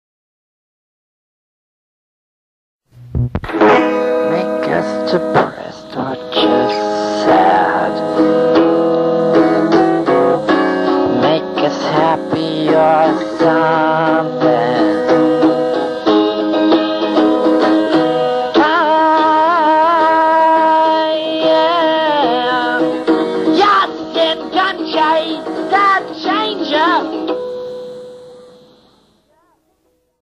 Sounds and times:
Music: 3.0s - 30.2s.

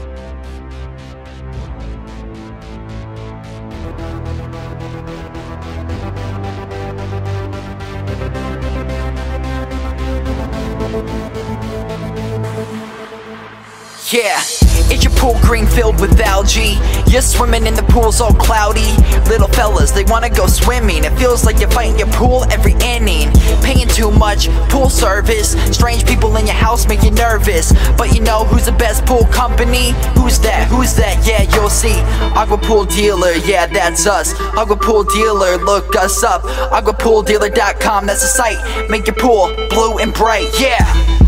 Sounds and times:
Music: 0.0s - 41.2s.

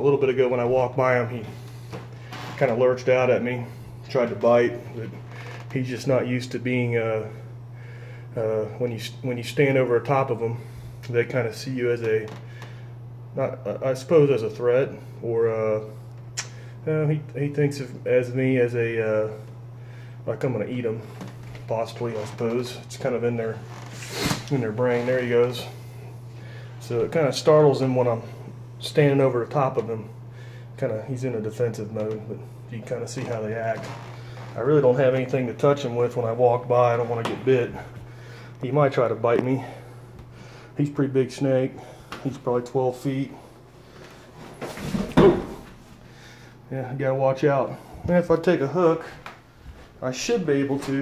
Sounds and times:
Speech: 0.0s - 1.6s, 2.6s - 7.4s, 8.4s - 12.4s, 13.3s - 16.0s, 16.8s - 19.4s, 20.2s - 21.1s, 21.7s - 23.6s, 24.4s - 25.8s, 26.8s - 30.2s, 30.8s - 34.0s, 34.6s - 37.9s, 38.6s - 39.8s, 40.8s - 43.4s, 44.9s - 45.6s, 46.7s - 49.3s, 50.0s - 51.0s.

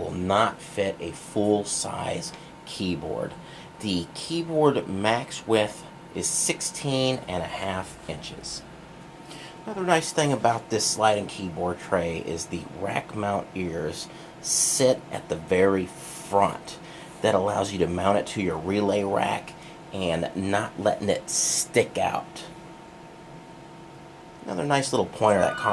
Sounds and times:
Speech: 0.0s - 8.7s, 9.6s - 22.6s, 24.4s - 25.7s.

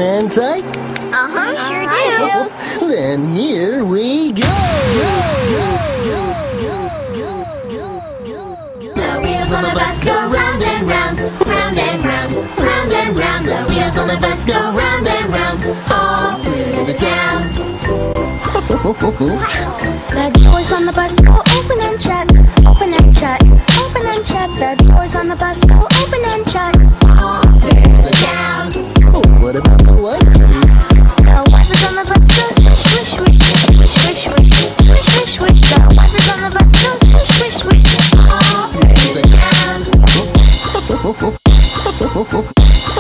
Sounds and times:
Dubstep: 4.4s - 9.4s, 20.4s - 43.0s.

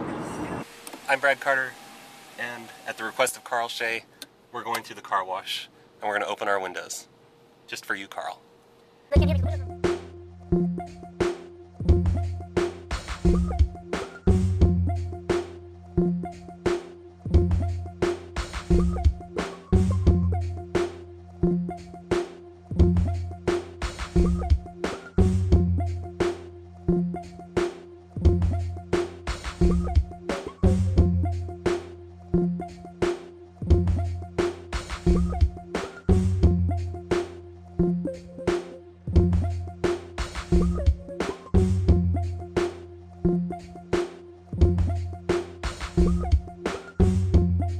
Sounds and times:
Music: 9.1s - 47.7s.

